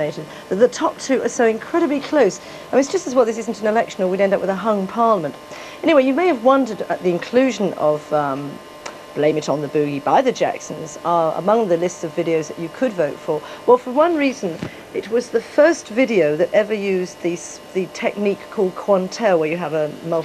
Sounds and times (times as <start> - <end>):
Speech: 0.0 - 8.6, 9.2 - 20.2.